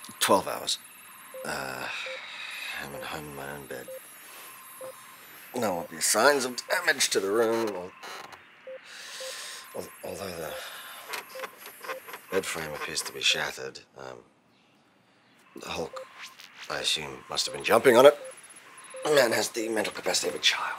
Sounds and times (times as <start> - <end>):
Speech: 0.0 - 0.8, 1.4 - 2.0, 2.8 - 3.9, 5.6 - 7.9, 9.8 - 10.7, 12.3 - 14.2, 15.6 - 16.0, 16.7 - 18.2, 19.0 - 20.7.